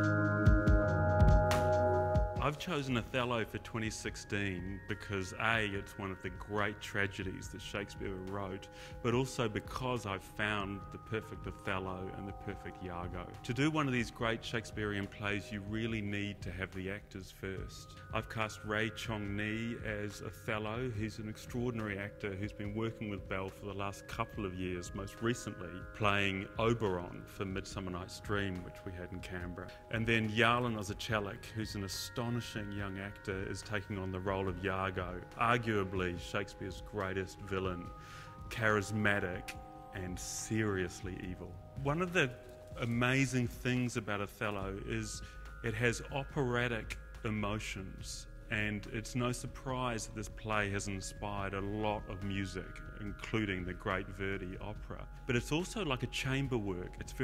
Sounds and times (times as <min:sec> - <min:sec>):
Music: 0:00.0 - 0:57.2
Speech: 0:02.4 - 0:57.2.